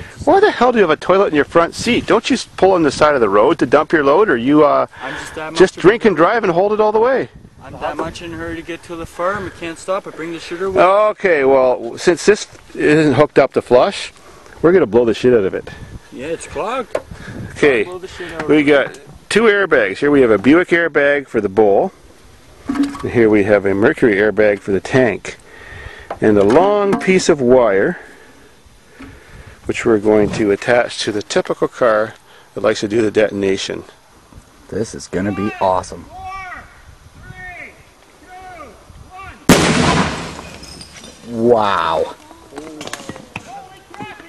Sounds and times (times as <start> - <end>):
Speech: 0.2 - 16.9, 29.7 - 34.0, 41.3 - 44.2.